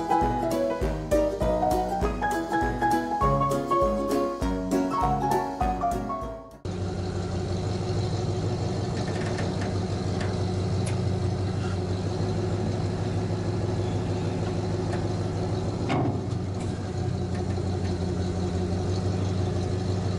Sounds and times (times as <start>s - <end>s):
Music: 0.0s - 6.7s
Vehicle: 6.6s - 20.1s.